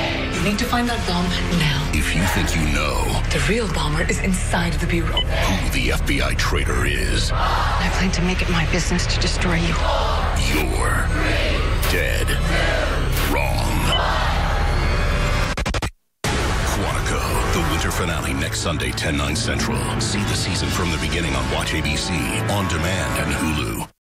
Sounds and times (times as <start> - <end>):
Music: 0.0 - 24.0
Speech: 0.4 - 9.8, 10.4 - 11.2, 11.8 - 12.4, 16.7 - 24.0.